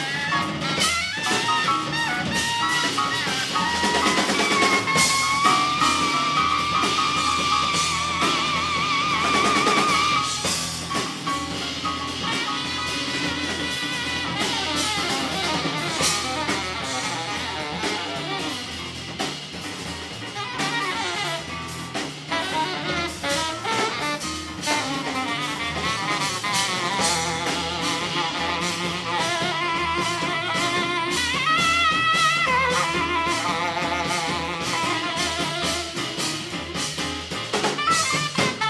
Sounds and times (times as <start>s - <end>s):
Blues: 0.0s - 38.7s
Double bass: 0.0s - 38.7s
Drum: 0.0s - 38.7s
Drum kit: 0.0s - 38.7s
Saxophone: 0.0s - 38.7s.